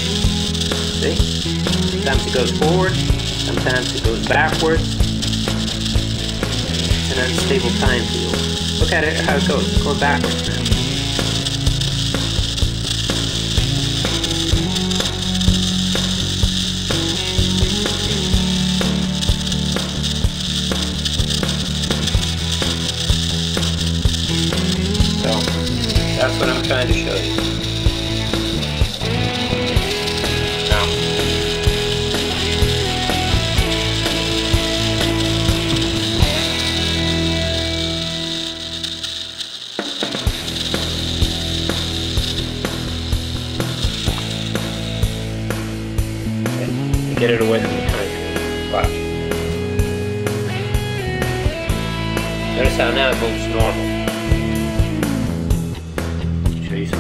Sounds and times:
Music: 0.0 - 57.0
Speech: 1.0 - 1.2, 2.0 - 4.9, 7.1 - 10.7, 25.2 - 25.6, 26.2 - 27.4, 30.6 - 31.0, 46.6 - 49.0, 52.5 - 53.8, 56.6 - 57.0.

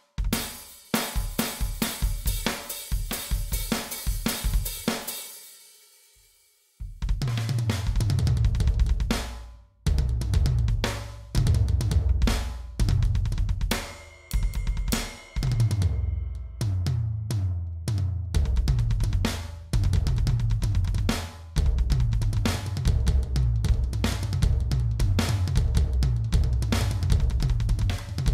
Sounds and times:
Music: 0.0 - 28.3.

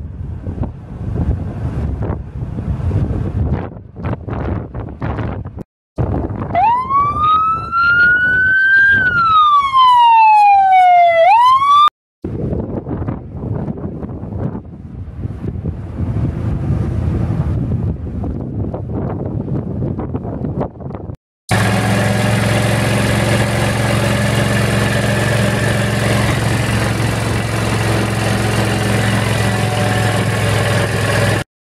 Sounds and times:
Vehicle: 0.0 - 11.4, 12.3 - 31.5.

